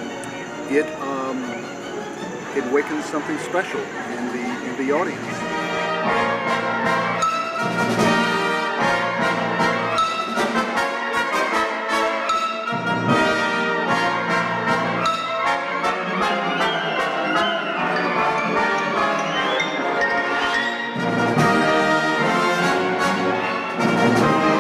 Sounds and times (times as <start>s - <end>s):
Classical music: 0.0s - 24.6s
Orchestra: 0.0s - 24.6s.